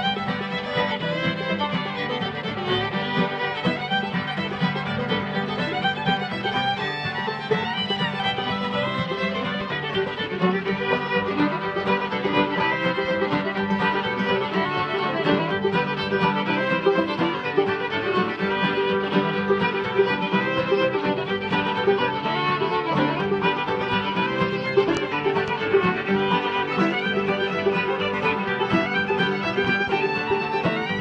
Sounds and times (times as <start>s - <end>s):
Pizzicato: 0.0s - 31.0s.